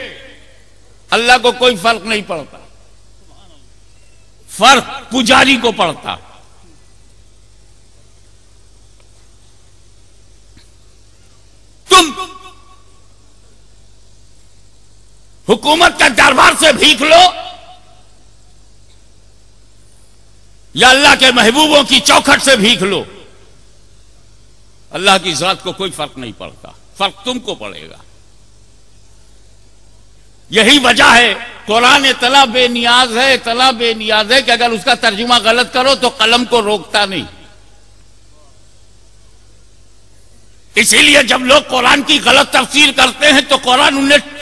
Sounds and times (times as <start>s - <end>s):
Narration, monologue: 0.0s - 44.4s
Male speech, man speaking: 1.1s - 2.6s, 4.5s - 6.2s, 11.9s - 12.4s, 15.5s - 17.5s, 20.8s - 23.1s, 24.9s - 28.0s, 30.5s - 37.4s, 40.8s - 44.4s.